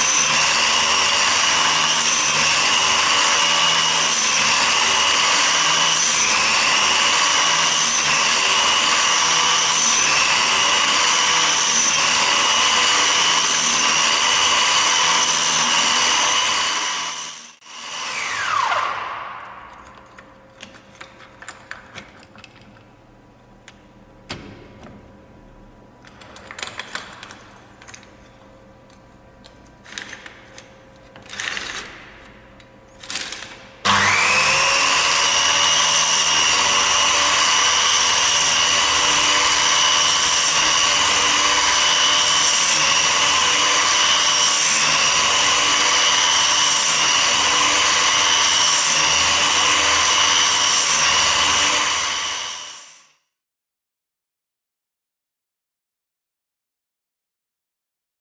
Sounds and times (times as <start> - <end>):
Tools: 0.0 - 17.6, 19.6 - 22.9, 26.0 - 34.2, 35.0 - 53.2.